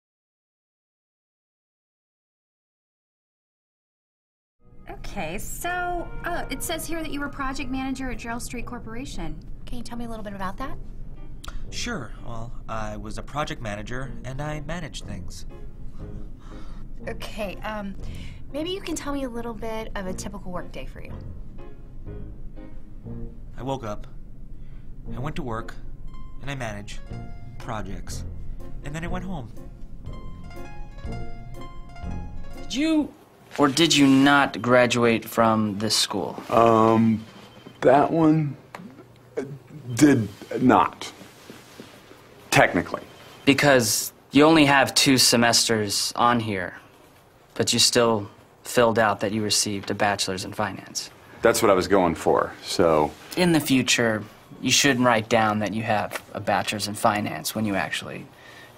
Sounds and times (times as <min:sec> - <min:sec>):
Music: 0:04.6 - 0:35.0.